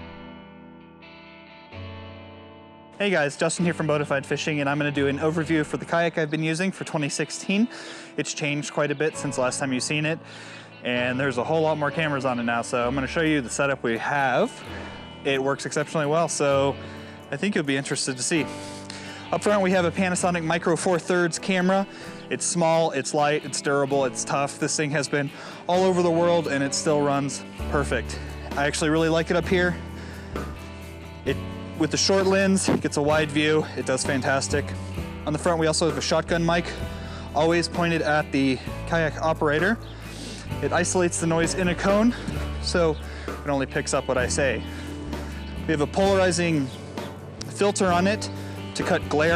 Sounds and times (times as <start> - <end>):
Music: 0.0 - 49.3
Speech: 3.0 - 10.2, 10.8 - 14.5, 15.2 - 18.5, 19.3 - 29.8, 31.3 - 36.8, 37.4 - 39.8, 40.6 - 44.6, 45.7 - 46.8, 47.4 - 49.3.